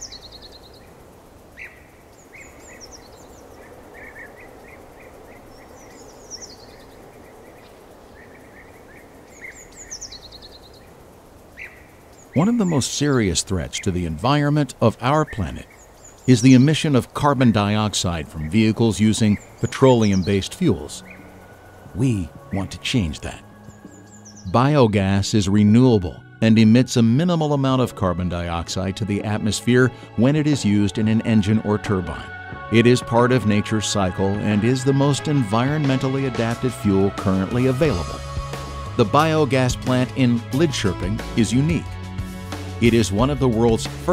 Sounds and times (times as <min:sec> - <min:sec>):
Environmental noise: 0:00.0 - 0:44.1.